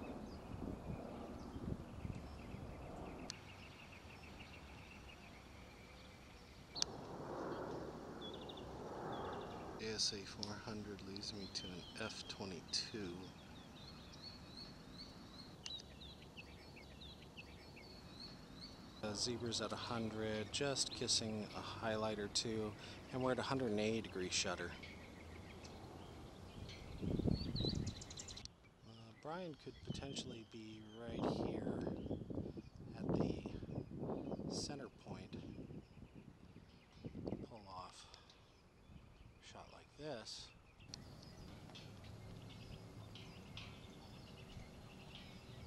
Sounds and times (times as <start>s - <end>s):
Speech: 9.8s - 13.3s, 19.0s - 24.8s, 28.8s - 31.9s, 32.9s - 33.7s, 34.5s - 35.5s, 37.4s - 38.2s, 39.4s - 40.5s.